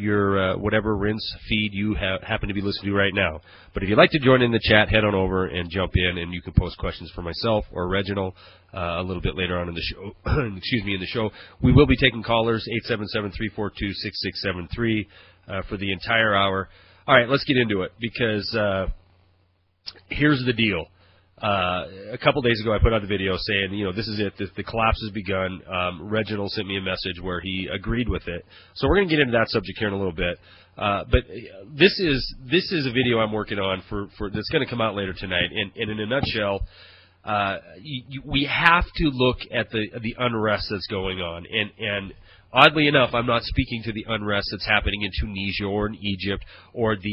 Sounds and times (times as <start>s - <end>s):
Speech: 0.0s - 19.0s, 19.9s - 36.7s, 37.3s - 47.1s.